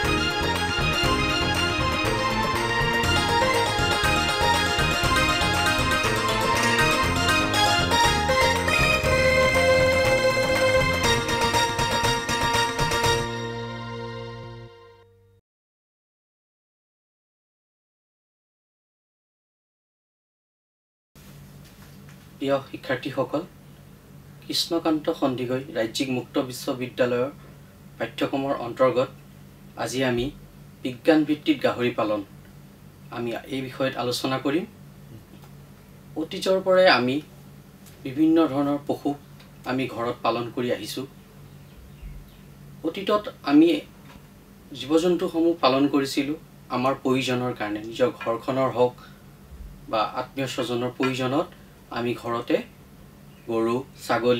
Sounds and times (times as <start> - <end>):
Music: 0.0 - 15.4
Speech: 22.4 - 23.5, 24.4 - 27.4, 28.0 - 29.2, 29.8 - 32.3, 33.1 - 34.7, 36.2 - 37.3, 38.0 - 41.1, 42.8 - 43.9, 44.7 - 49.0, 49.9 - 52.7, 53.5 - 54.3.